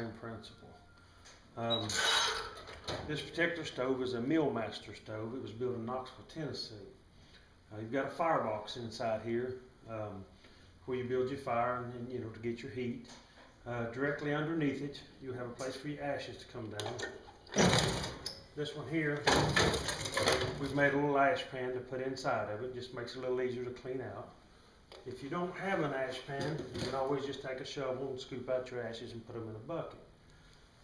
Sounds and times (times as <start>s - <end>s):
Speech: 0.0s - 0.8s, 1.6s - 2.0s, 3.0s - 7.0s, 7.7s - 10.3s, 10.9s - 17.2s, 18.6s - 19.5s, 20.5s - 24.4s, 25.0s - 30.0s.